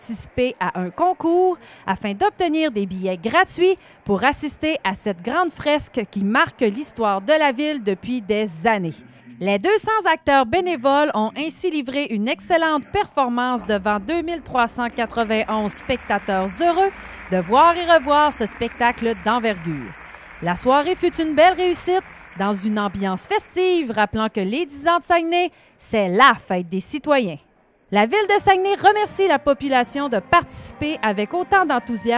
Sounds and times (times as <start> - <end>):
Speech: 0.0 - 27.4, 28.0 - 32.1.